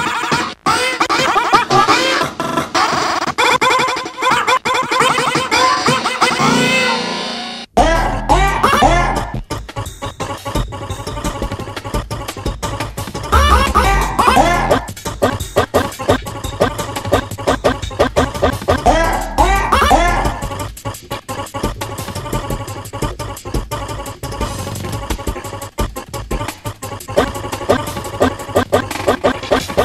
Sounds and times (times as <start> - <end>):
Music: 0.0 - 29.8.